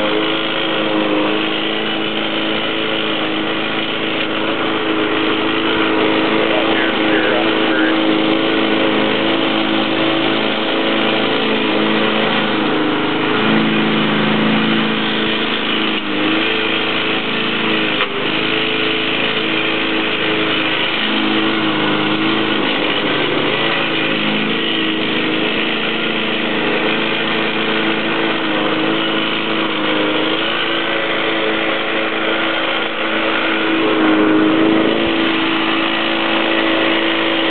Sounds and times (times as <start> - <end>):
Lawn mower: 0.0 - 37.5.